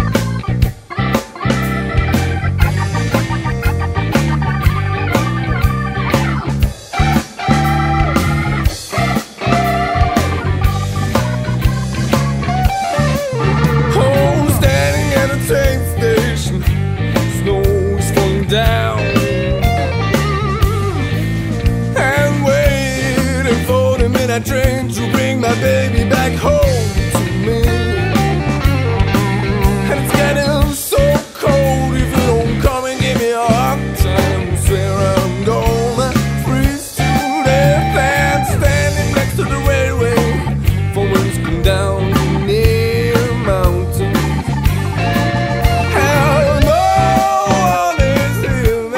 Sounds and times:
Blues: 0.0s - 48.9s.

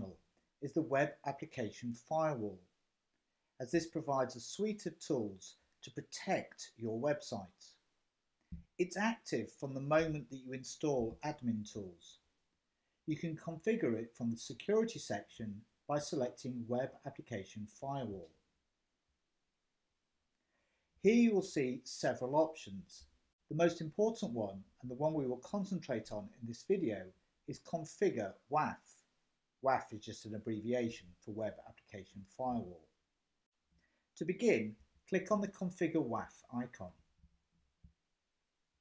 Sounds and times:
Speech: 0.0s - 2.6s, 3.6s - 7.8s, 8.8s - 12.2s, 13.1s - 18.3s, 21.1s - 29.0s, 29.6s - 32.8s, 34.2s - 37.0s.

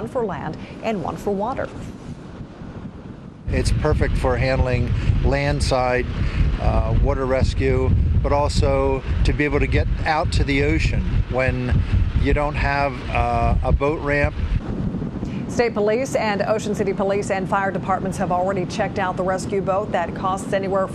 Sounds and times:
Speech: 0.0s - 1.7s, 3.5s - 14.3s, 15.5s - 20.9s
Sailboat, sailing ship: 0.0s - 20.9s.

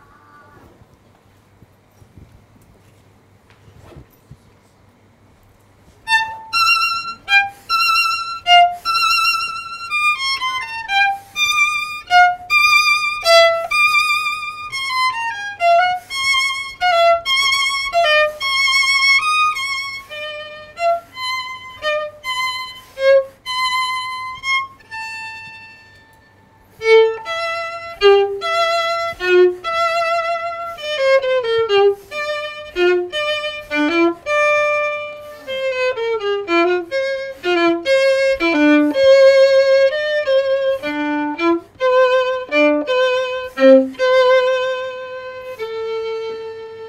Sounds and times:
Violin, fiddle: 6.1s - 46.8s.

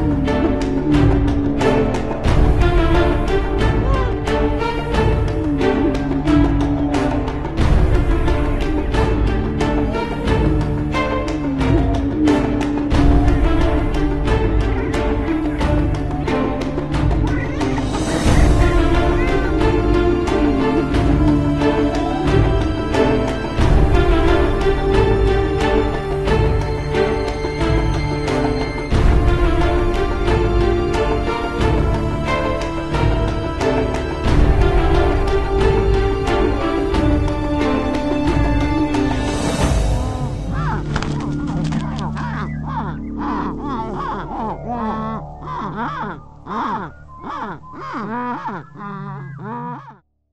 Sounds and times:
Music: 0.0s - 50.0s
Bird: 38.8s - 50.0s.

